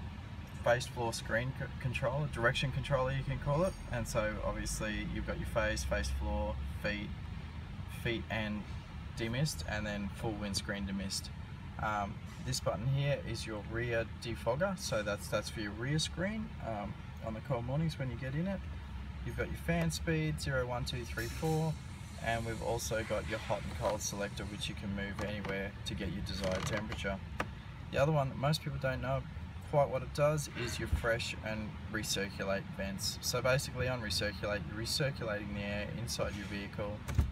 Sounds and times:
Speech: 0.6s - 7.2s, 7.9s - 27.2s, 27.9s - 37.1s.

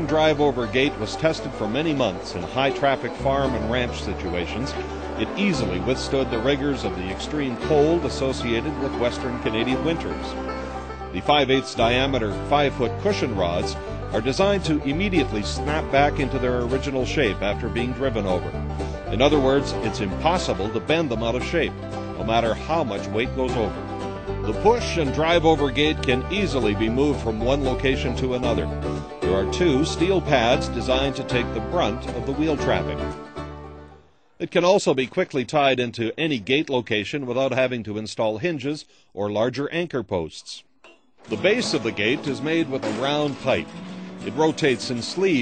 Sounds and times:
Speech: 0.0s - 10.4s, 11.1s - 18.5s, 19.1s - 23.8s, 24.5s - 33.0s, 34.4s - 40.6s, 41.3s - 45.4s
Music: 0.0s - 35.3s, 40.8s - 45.4s.

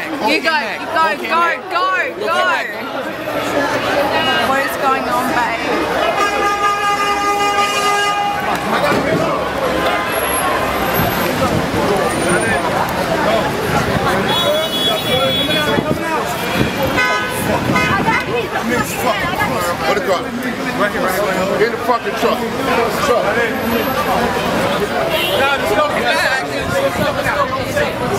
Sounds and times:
Speech: 8.4s - 28.1s.

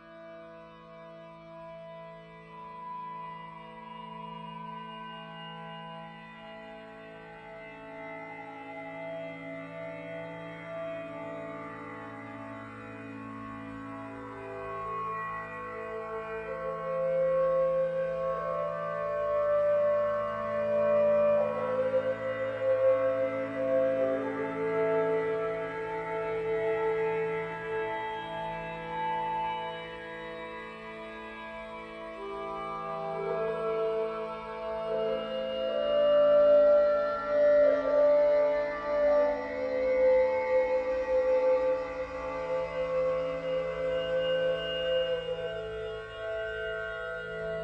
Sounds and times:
Sad music: 1.7s - 47.6s.

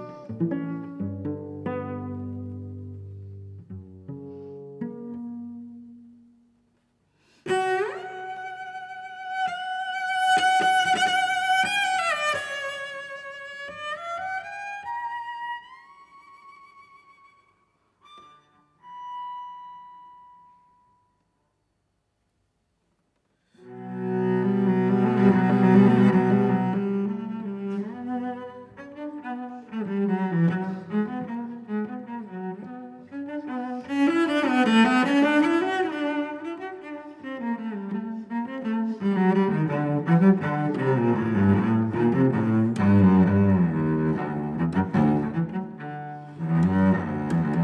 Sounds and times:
Violin, fiddle: 7.5s - 20.7s.

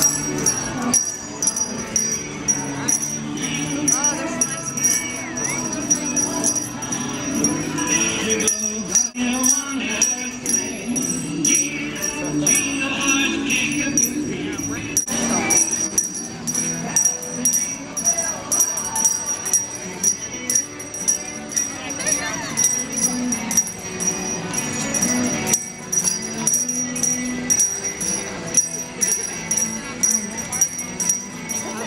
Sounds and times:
Jingle bell: 0.0s - 31.8s.

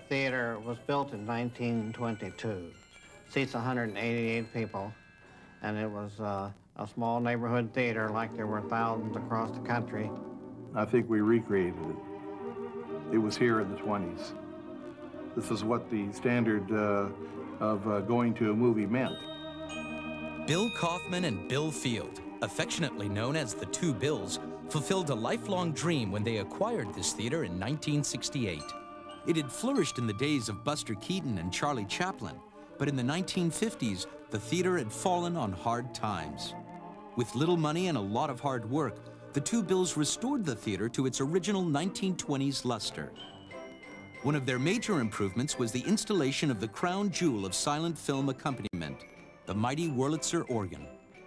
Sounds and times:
Speech: 0.1s - 5.0s, 5.6s - 10.2s, 10.8s - 12.0s, 13.1s - 14.4s, 15.4s - 19.2s, 20.5s - 36.6s, 37.2s - 43.2s, 44.2s - 50.9s.

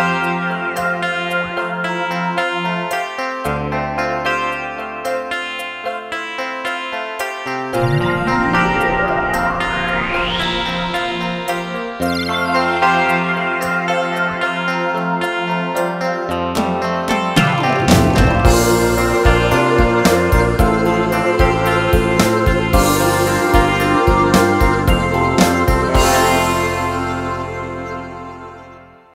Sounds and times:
Music: 0.0s - 29.1s.

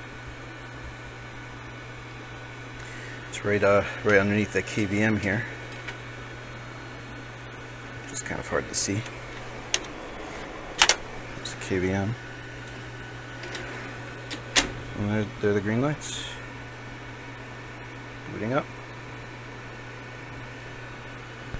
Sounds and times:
Speech: 3.3s - 5.6s, 8.1s - 9.1s, 11.4s - 12.2s, 15.0s - 16.4s, 18.2s - 18.7s.

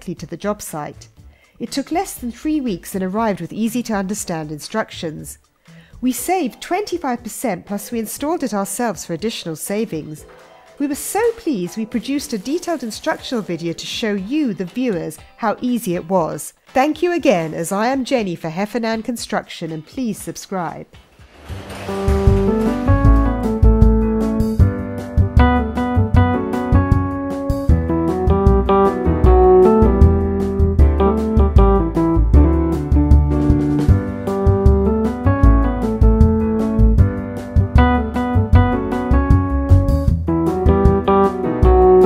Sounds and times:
Speech: 0.0s - 5.4s, 6.0s - 10.2s, 10.8s - 20.9s.

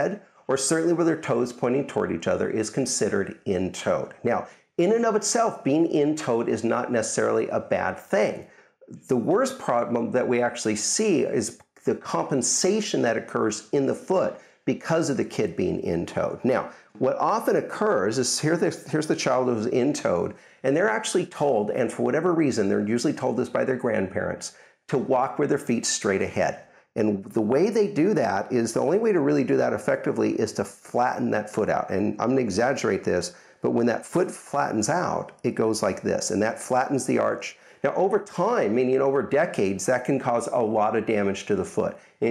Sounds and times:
Speech: 0.0s - 42.3s.

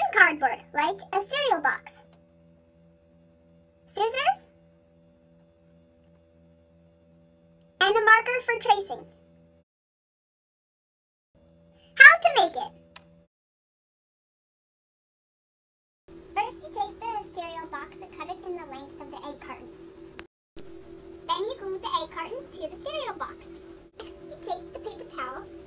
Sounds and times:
Speech: 0.0s - 2.0s, 3.9s - 4.5s, 7.8s - 9.1s, 12.0s - 12.7s, 16.4s - 19.7s, 21.3s - 25.5s.

